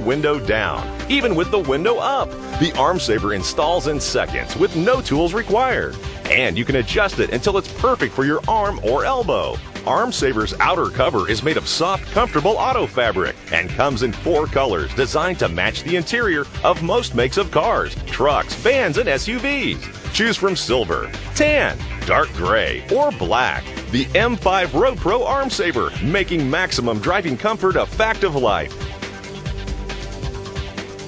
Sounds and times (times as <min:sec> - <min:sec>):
Speech: 0:00.0 - 0:28.7
Music: 0:00.0 - 0:31.0.